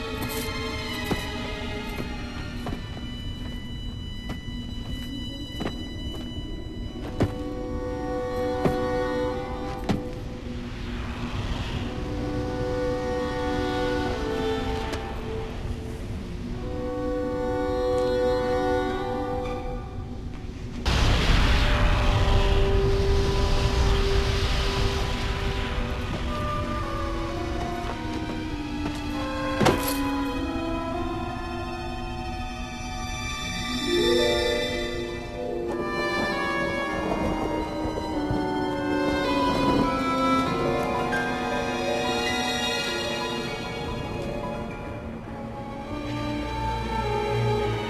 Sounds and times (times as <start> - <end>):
Music: 0.0 - 47.9.